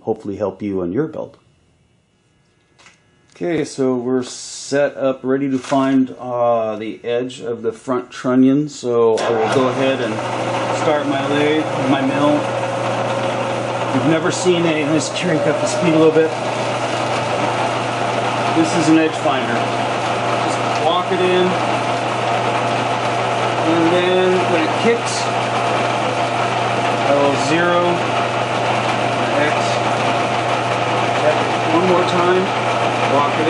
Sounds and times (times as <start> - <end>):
Speech: 0.0 - 1.4, 3.4 - 10.2, 10.8 - 12.5, 13.9 - 16.4, 18.5 - 19.7, 20.5 - 21.6, 23.6 - 25.4, 27.0 - 28.1, 29.2 - 29.9, 31.2 - 33.4.